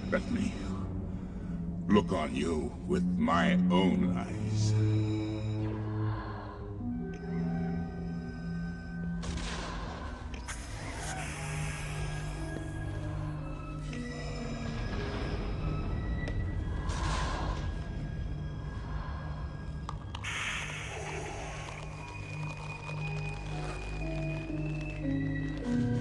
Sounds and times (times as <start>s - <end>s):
Music: 0.0s - 26.0s.